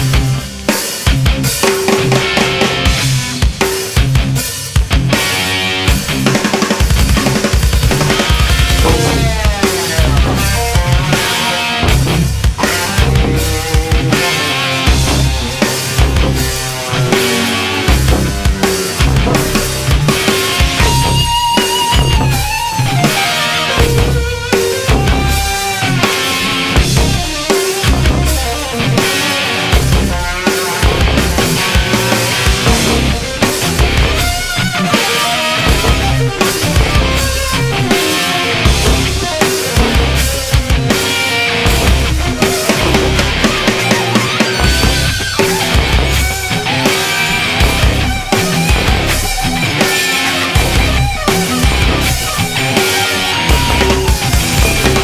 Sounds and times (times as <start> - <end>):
Music: 0.0 - 55.0.